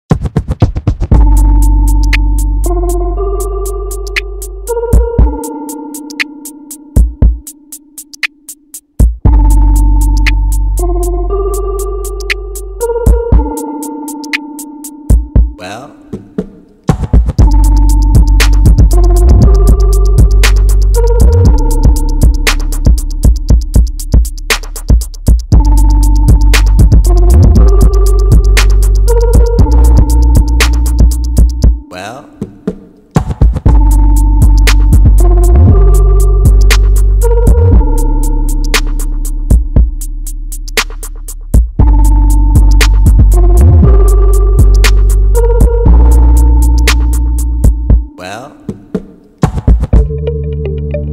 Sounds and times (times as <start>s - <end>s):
Drum machine: 0.1s - 50.2s.